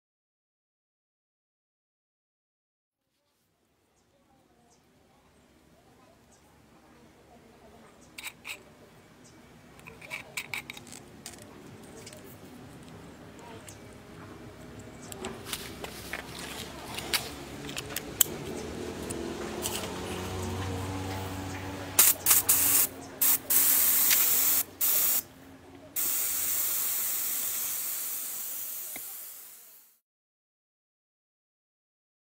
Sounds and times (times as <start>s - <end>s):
Spray: 22.0s - 25.3s, 26.0s - 30.0s.